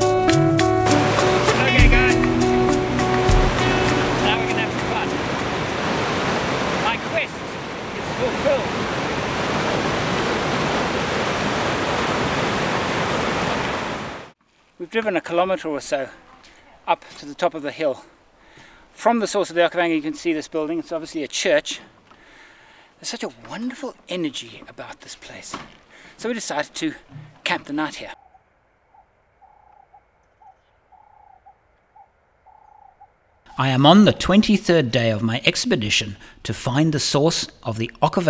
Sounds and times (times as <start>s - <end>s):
Stream: 0.8s - 14.4s.